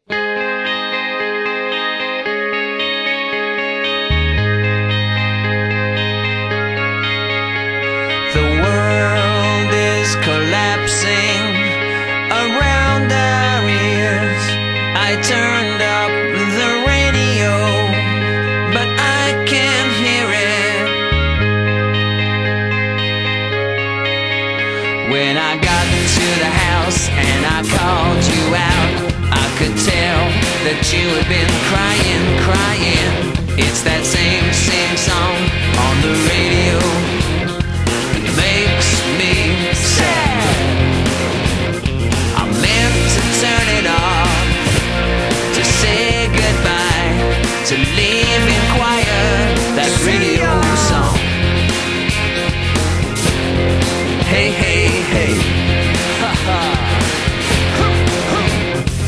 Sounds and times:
Music: 0.0 - 59.0.

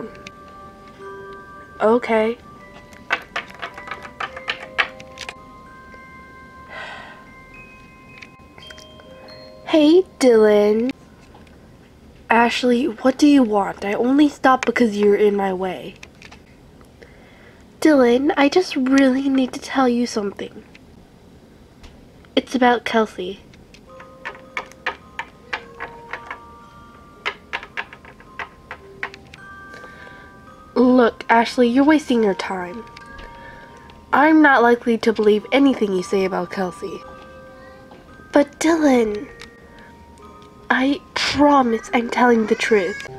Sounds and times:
Music: 0.0 - 16.5, 23.4 - 43.1
Inside, small room: 0.0 - 43.1
Speech: 1.8 - 2.4, 12.3 - 16.0, 17.8 - 20.6, 22.4 - 23.4, 30.8 - 32.8, 34.2 - 37.0, 40.7 - 43.1.

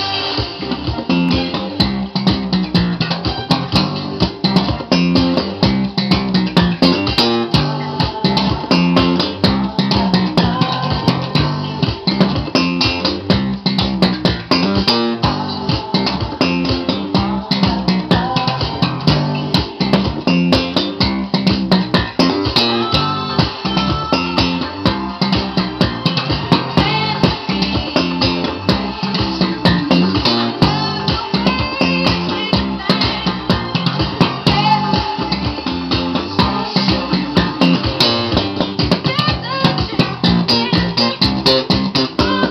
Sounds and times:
Bass guitar: 0.0 - 42.5.

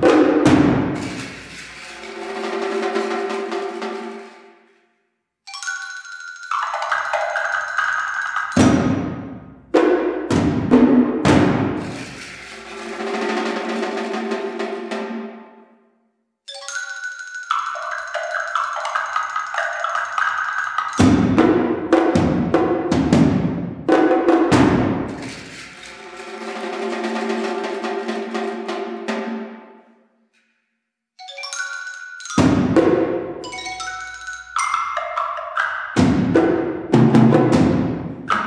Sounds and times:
Wood block: 0.0 - 4.5, 5.5 - 14.4, 16.5 - 23.4, 24.0 - 28.6, 31.2 - 38.4.

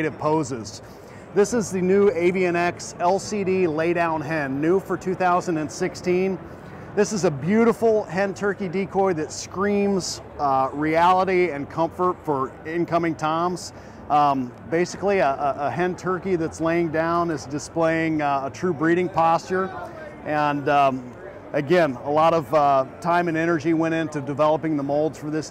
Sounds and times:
Speech: 0.0 - 0.8, 1.4 - 6.4, 7.0 - 25.5.

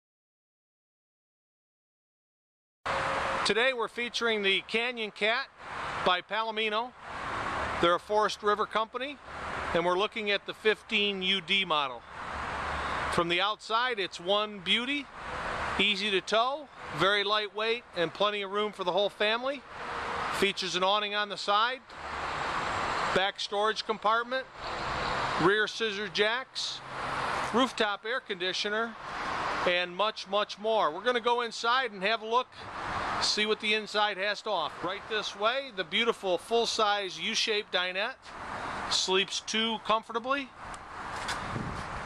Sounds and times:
Speech: 3.5 - 7.0, 7.8 - 12.0, 13.1 - 15.1, 15.8 - 19.6, 20.4 - 21.9, 23.1 - 24.5, 25.4 - 26.8, 27.5 - 29.0, 29.6 - 32.6, 33.2 - 38.2, 38.9 - 40.6.

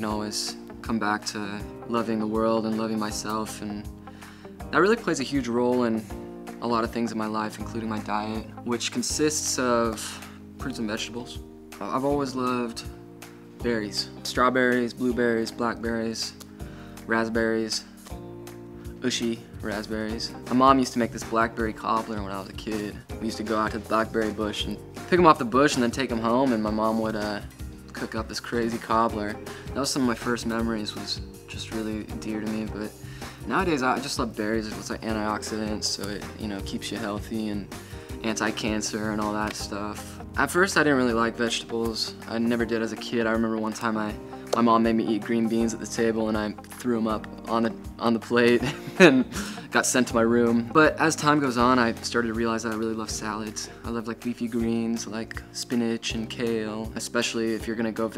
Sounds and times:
Speech: 0.0 - 3.9, 4.7 - 12.9, 13.6 - 16.4, 17.1 - 18.0, 19.0 - 58.1
Music: 0.0 - 58.1.

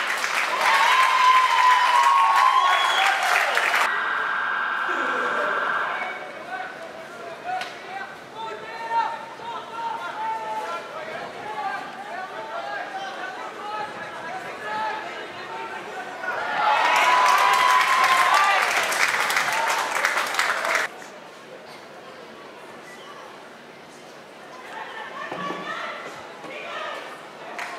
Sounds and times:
Applause: 0.0 - 3.9, 16.7 - 20.9, 27.6 - 27.7.

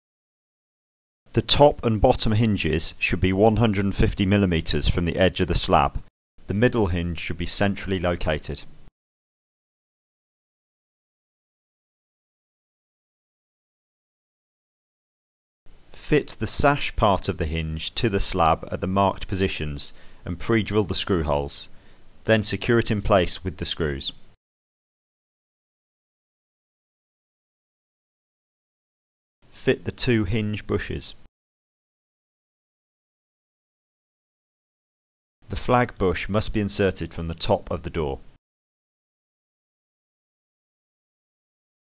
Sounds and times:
Speech: 1.3 - 8.7, 16.0 - 24.2, 29.5 - 31.3, 35.5 - 38.2.

